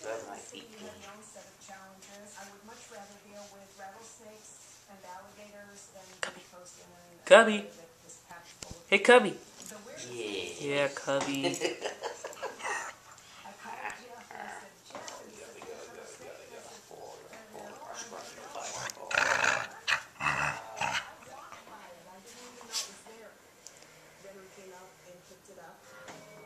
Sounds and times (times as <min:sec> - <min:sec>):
Speech: 0:00.0 - 0:11.8, 0:13.5 - 0:23.4.